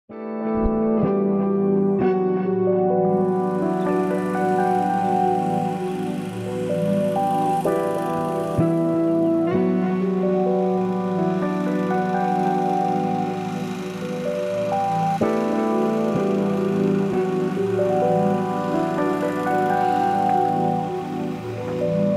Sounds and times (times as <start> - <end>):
Music: 0.1 - 22.1
Outside, rural or natural: 0.6 - 22.1.